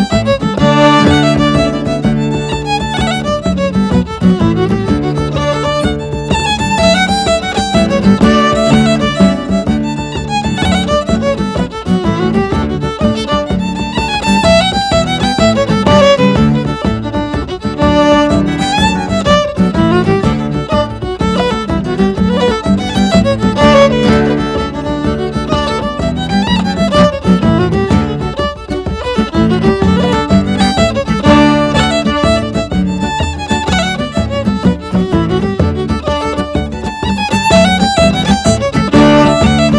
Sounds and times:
Music: 0.0s - 39.7s.

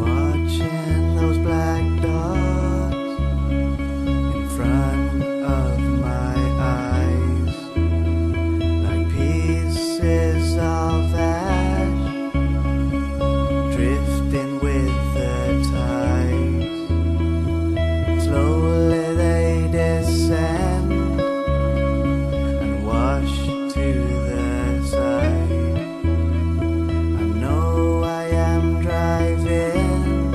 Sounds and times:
Music: 0.0s - 30.3s.

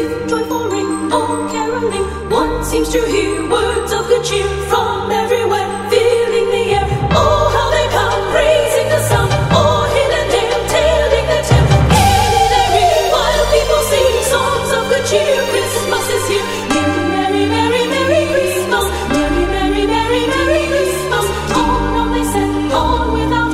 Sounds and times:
Music: 0.0s - 23.5s.

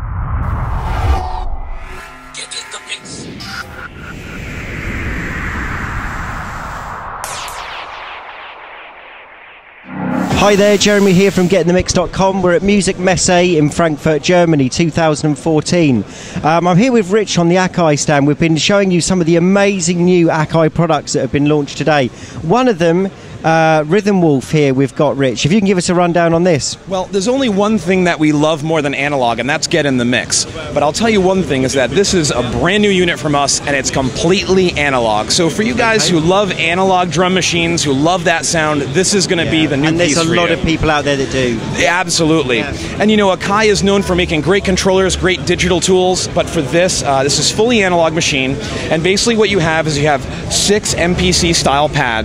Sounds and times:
Speech: 10.3s - 52.2s.

